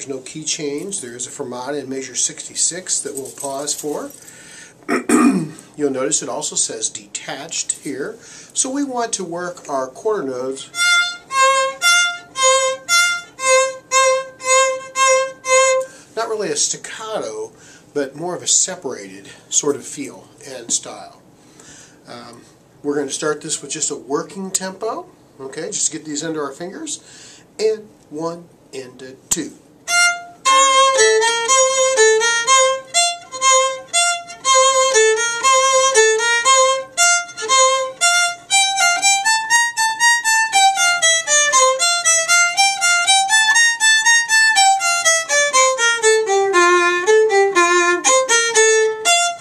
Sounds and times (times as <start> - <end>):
Speech: 0.0 - 4.2, 5.8 - 10.7, 16.2 - 21.2, 22.1 - 27.0, 27.6 - 29.6.